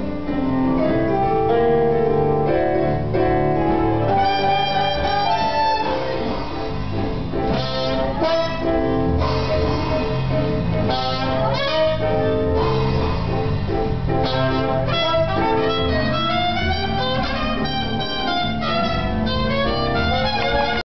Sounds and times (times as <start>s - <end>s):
Soundtrack music: 0.0s - 20.8s.